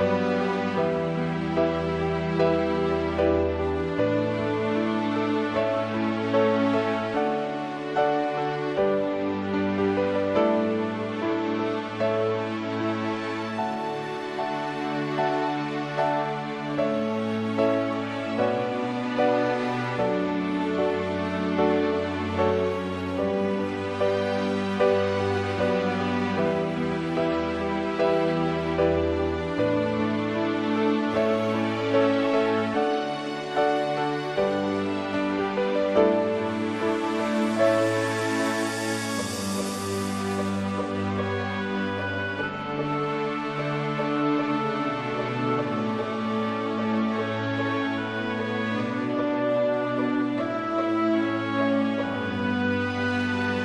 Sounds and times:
Tender music: 0.0s - 53.6s.

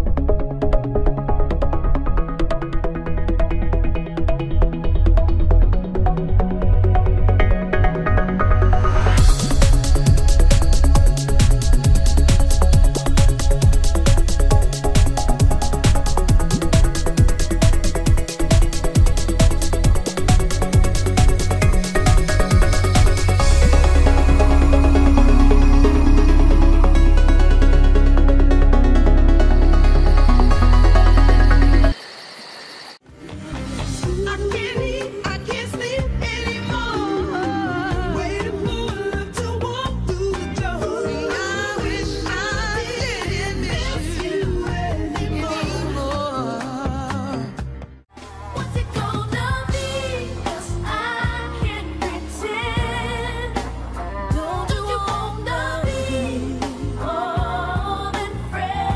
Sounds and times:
Exciting music: 0.0s - 32.0s
Soundtrack music: 0.0s - 32.0s, 33.0s - 57.9s.

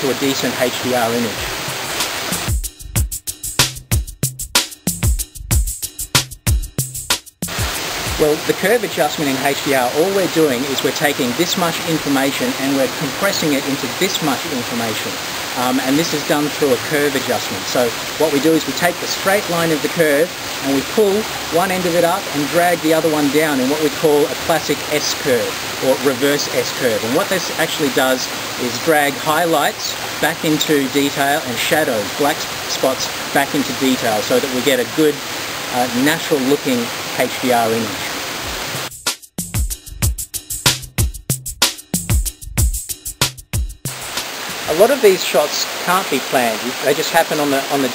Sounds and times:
Speech: 0.0s - 1.5s, 8.2s - 38.2s, 44.7s - 47.9s
Waterfall: 0.0s - 2.6s, 7.5s - 38.9s, 43.9s - 47.9s
Music: 0.3s - 35.1s, 37.4s - 45.7s.

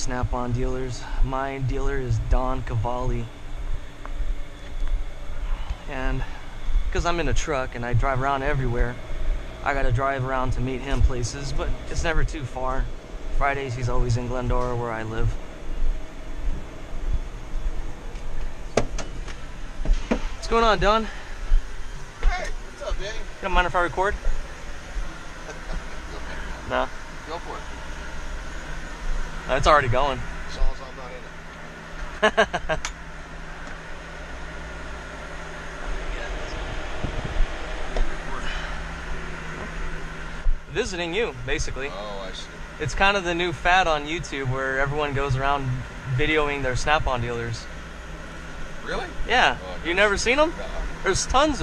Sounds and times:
Speech: 0.0s - 3.3s, 5.9s - 6.3s, 6.9s - 9.0s, 9.6s - 15.3s, 20.4s - 21.1s, 22.2s - 24.2s, 29.5s - 31.3s, 40.7s - 47.7s, 48.8s - 51.6s.

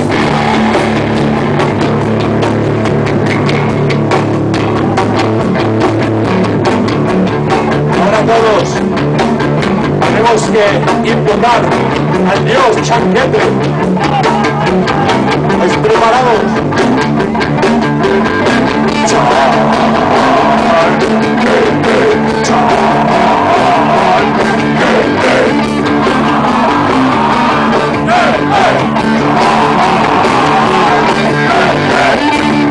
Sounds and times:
Rock music: 0.0s - 32.7s.

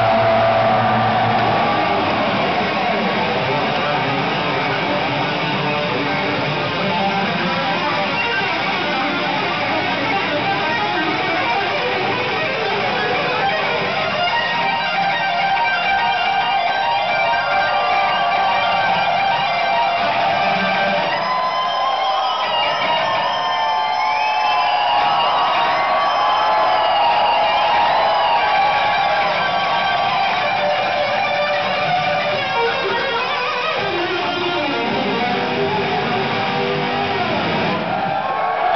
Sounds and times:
Bass guitar: 26.9s - 38.0s.

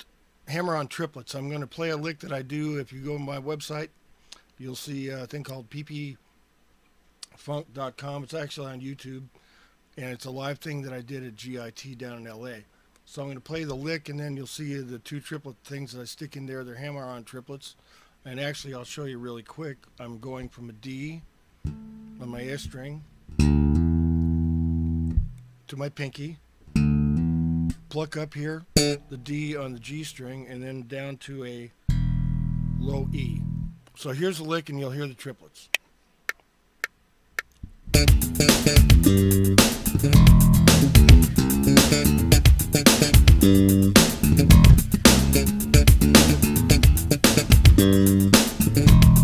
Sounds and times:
Speech: 0.0s - 3.9s, 4.6s - 6.2s, 7.2s - 9.3s, 10.0s - 21.3s, 22.2s - 23.1s, 25.7s - 26.4s, 27.9s - 31.8s, 32.8s - 35.8s
Music: 21.7s - 22.2s, 23.3s - 25.4s, 26.7s - 27.8s, 31.9s - 33.8s, 37.9s - 49.2s.

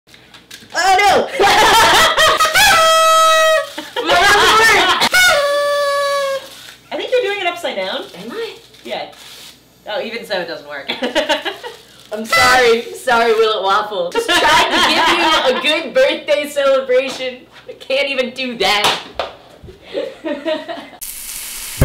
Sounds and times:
Inside, small room: 0.1s - 21.8s.

